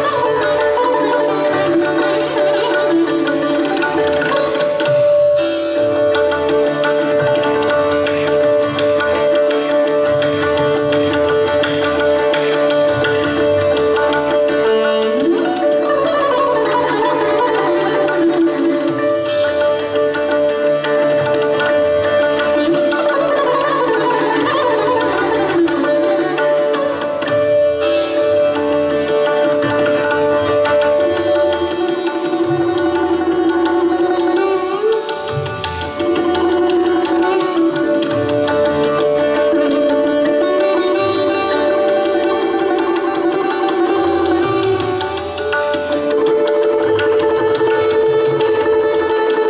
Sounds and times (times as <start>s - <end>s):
Sitar: 0.0s - 49.5s.